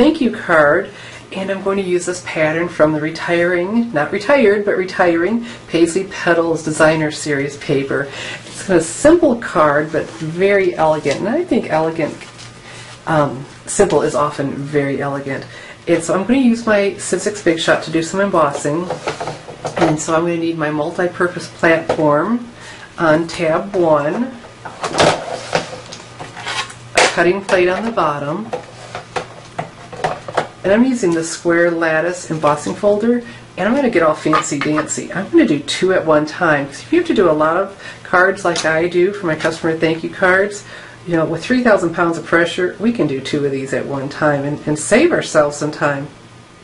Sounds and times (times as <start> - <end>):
Speech: 0.0 - 12.2, 13.1 - 19.0, 19.8 - 24.4, 27.0 - 28.6, 30.6 - 46.2.